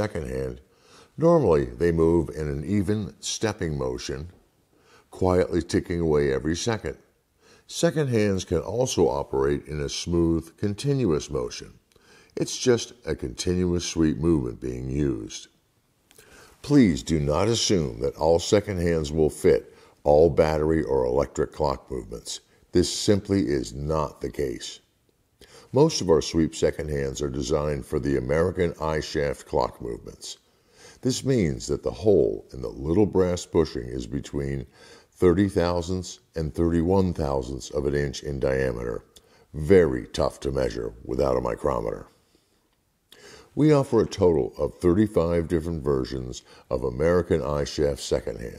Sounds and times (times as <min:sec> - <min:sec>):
Speech: 0:00.0 - 0:04.4, 0:05.1 - 0:07.1, 0:07.7 - 0:11.8, 0:12.4 - 0:15.6, 0:16.6 - 0:24.9, 0:25.7 - 0:30.4, 0:31.0 - 0:42.2, 0:43.6 - 0:48.5.